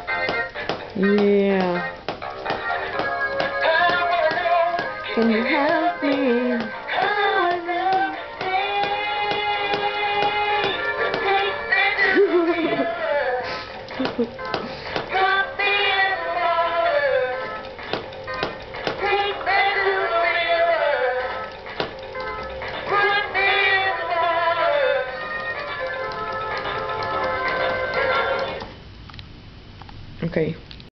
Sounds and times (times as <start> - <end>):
Music: 0.0 - 28.8
Speech: 1.0 - 1.8, 5.2 - 6.7, 30.2 - 30.6.